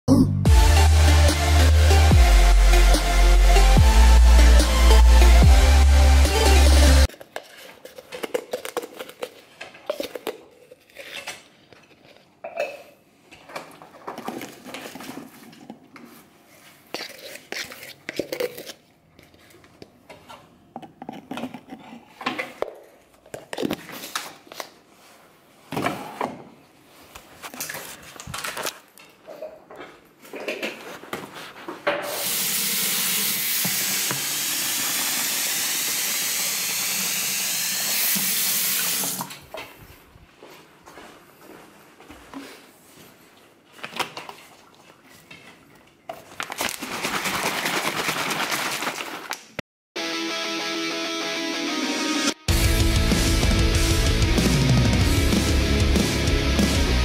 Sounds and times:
Biting: 0:07.1 - 0:11.5.

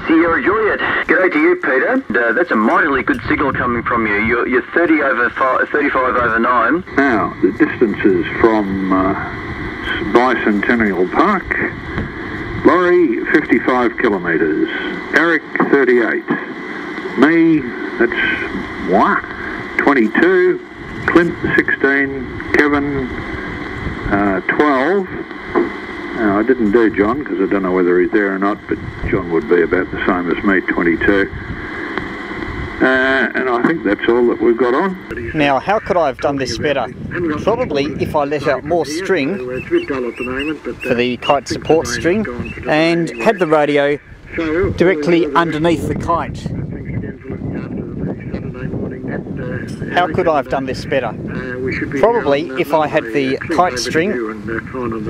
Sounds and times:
Radio: 0:00.0 - 0:55.0.

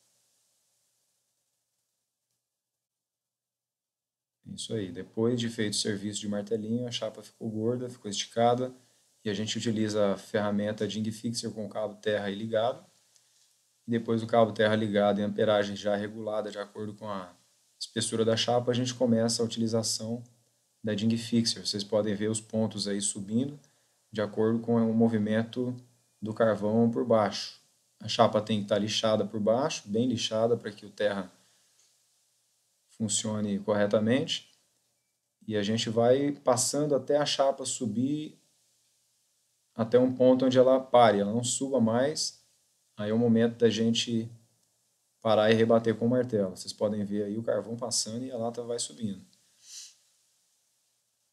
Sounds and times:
Speech: 0:04.5 - 0:12.9, 0:13.9 - 0:23.6, 0:24.2 - 0:31.4, 0:33.0 - 0:34.5, 0:35.4 - 0:38.4, 0:39.8 - 0:42.4, 0:43.0 - 0:44.4, 0:45.3 - 0:49.3.

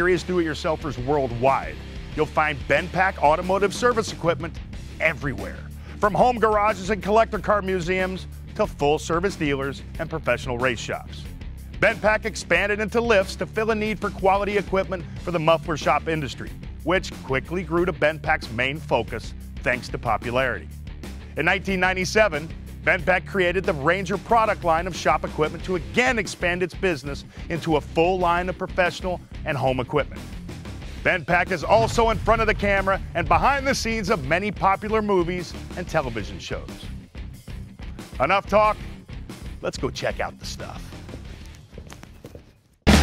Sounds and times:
Speech: 0:00.0 - 0:20.7, 0:21.4 - 0:30.2, 0:31.0 - 0:36.9, 0:38.2 - 0:38.8, 0:39.6 - 0:41.0
Music: 0:00.0 - 0:43.0.

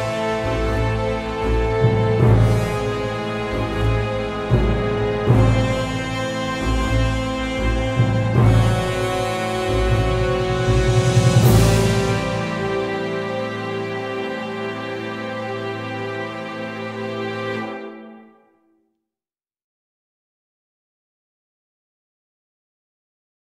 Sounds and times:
Music: 0:00.0 - 0:19.2.

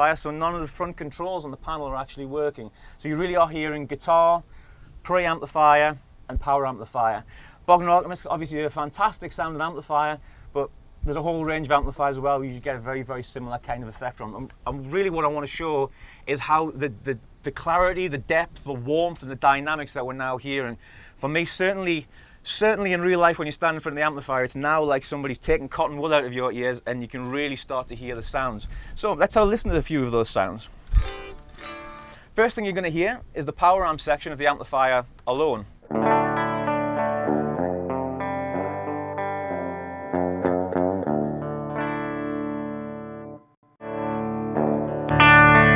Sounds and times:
Speech: 0:00.0 - 0:30.7, 0:32.4 - 0:35.8
Electric guitar: 0:30.9 - 0:32.3, 0:35.8 - 0:45.7.

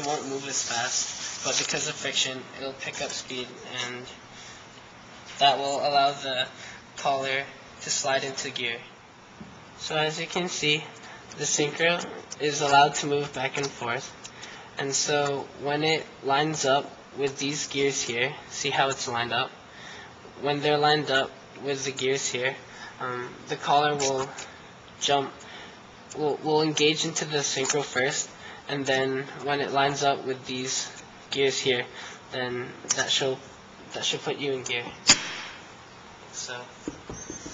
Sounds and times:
Speech: 0:00.0 - 0:04.2, 0:05.4 - 0:08.9, 0:09.8 - 0:14.2, 0:14.8 - 0:19.6, 0:20.4 - 0:25.4, 0:26.1 - 0:35.0, 0:36.3 - 0:36.8
Inside, small room: 0:00.0 - 0:37.5.

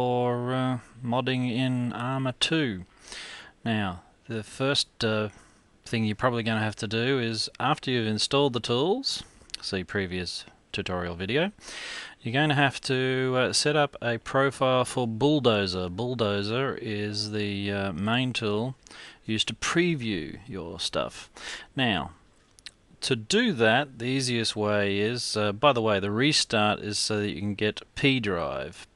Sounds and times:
Speech: 0:00.0 - 0:02.9, 0:03.6 - 0:11.6, 0:12.2 - 0:22.2, 0:23.0 - 0:28.9.

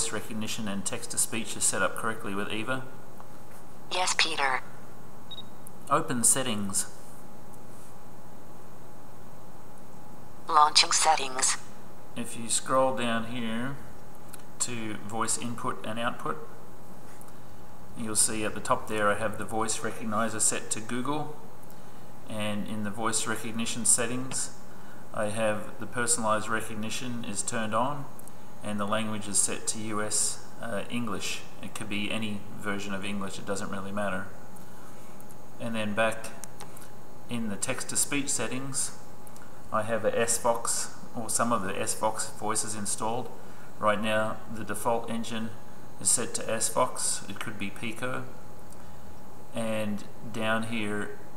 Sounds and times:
Speech: 0:00.0 - 0:03.0, 0:03.9 - 0:04.6, 0:05.9 - 0:07.0, 0:10.5 - 0:11.6, 0:12.2 - 0:13.8, 0:14.6 - 0:16.5, 0:18.0 - 0:21.4, 0:22.3 - 0:24.6, 0:25.2 - 0:34.4, 0:35.6 - 0:36.4, 0:37.3 - 0:39.0, 0:39.7 - 0:48.4, 0:49.6 - 0:51.2.

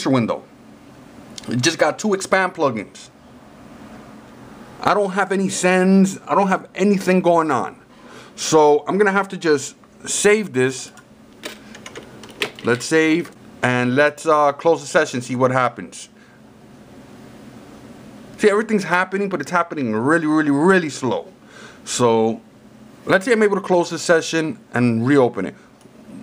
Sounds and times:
Speech: 0:00.0 - 0:00.5, 0:01.4 - 0:03.2, 0:04.8 - 0:07.8, 0:08.4 - 0:11.0, 0:12.6 - 0:16.2, 0:18.4 - 0:26.2.

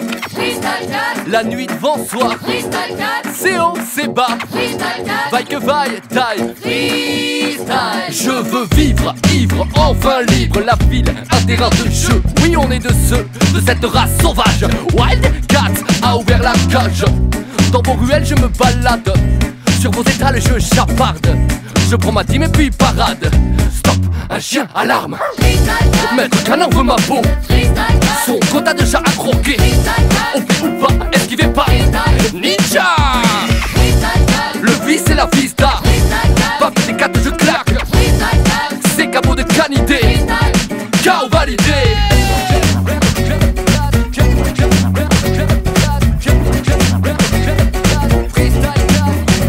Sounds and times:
Music: 0:00.0 - 0:24.6, 0:25.4 - 0:49.4.

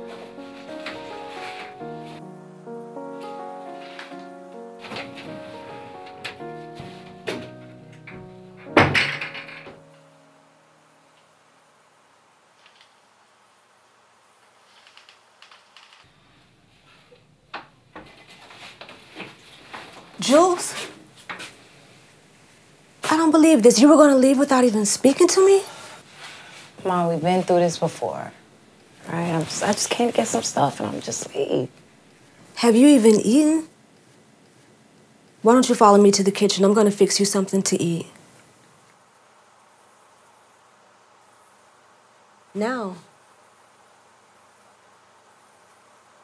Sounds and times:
Inside, small room: 0:00.0 - 0:46.2
Speech: 0:20.2 - 0:20.9, 0:23.1 - 0:25.8, 0:26.8 - 0:28.4, 0:29.1 - 0:31.7, 0:32.6 - 0:33.7, 0:35.4 - 0:38.2, 0:42.6 - 0:43.1.

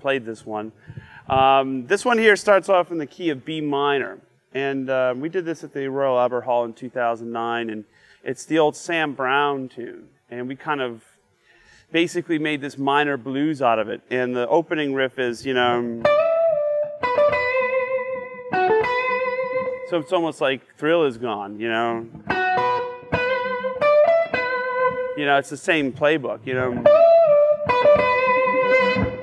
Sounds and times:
Speech: 0:00.0 - 0:00.7, 0:01.3 - 0:11.1, 0:11.9 - 0:16.1, 0:19.9 - 0:22.1, 0:25.2 - 0:26.9.

